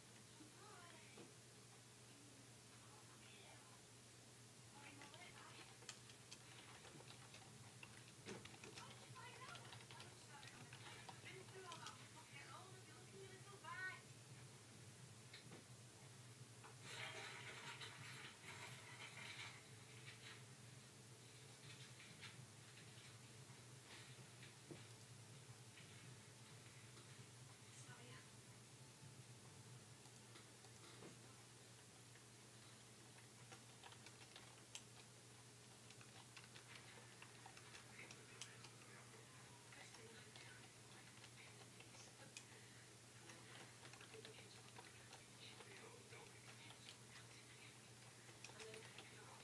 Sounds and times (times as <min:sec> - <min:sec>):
Speech: 0:00.3 - 0:01.3, 0:02.1 - 0:03.8, 0:04.7 - 0:05.8, 0:08.7 - 0:14.1, 0:27.7 - 0:28.3, 0:37.9 - 0:42.7.